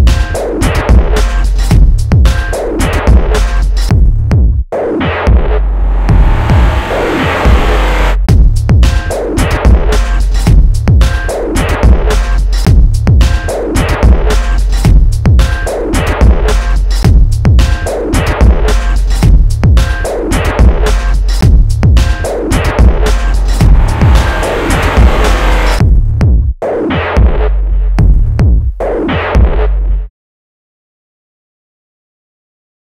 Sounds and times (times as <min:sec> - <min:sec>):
Throbbing: 0:05.3 - 0:08.2, 0:22.0 - 0:25.8.